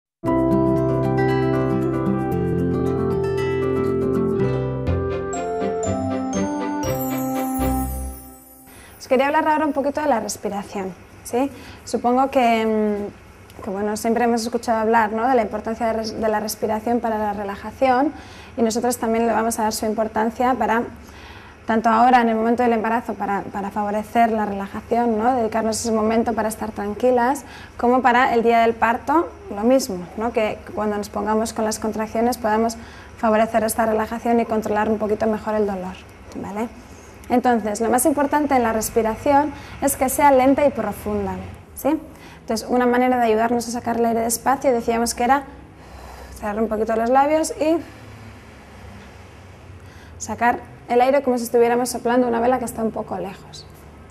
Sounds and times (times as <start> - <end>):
Music: 0.2 - 9.1
Speech: 9.0 - 21.0, 21.7 - 45.5, 46.4 - 47.9, 50.2 - 53.8.